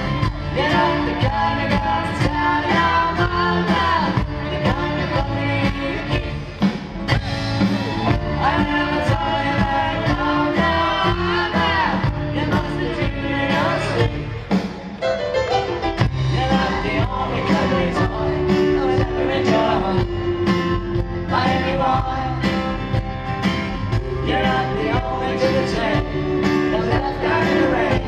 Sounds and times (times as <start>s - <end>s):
Singing: 0.2s - 6.5s, 8.0s - 14.7s, 16.3s - 23.0s, 23.9s - 28.0s.